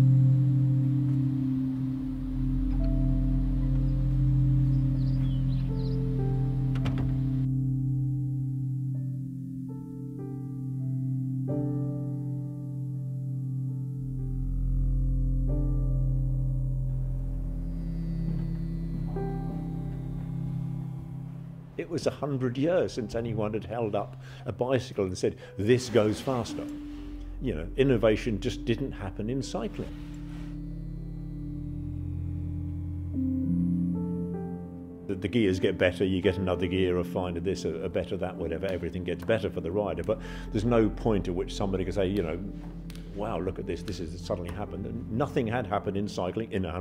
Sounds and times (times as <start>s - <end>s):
Music: 0.0s - 46.8s
Speech: 21.8s - 26.8s, 27.4s - 30.0s, 35.1s - 42.6s, 43.2s - 46.8s.